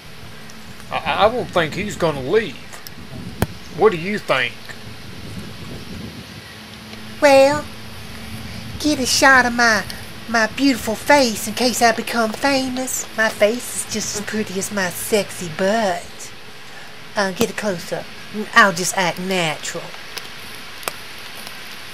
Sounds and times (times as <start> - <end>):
Speech: 0.9 - 2.7, 7.2 - 7.7, 8.8 - 16.3, 17.2 - 20.0.